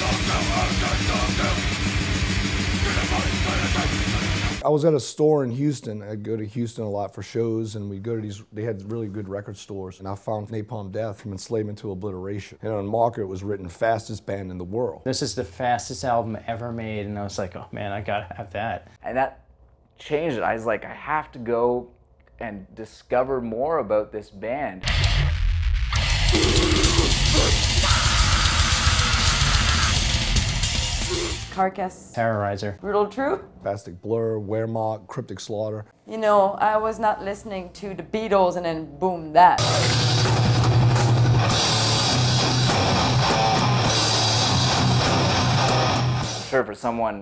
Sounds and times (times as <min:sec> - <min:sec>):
Speech: 0:00.0 - 0:01.7, 0:02.7 - 0:19.4, 0:20.0 - 0:24.8, 0:31.6 - 0:39.9, 0:46.5 - 0:47.2.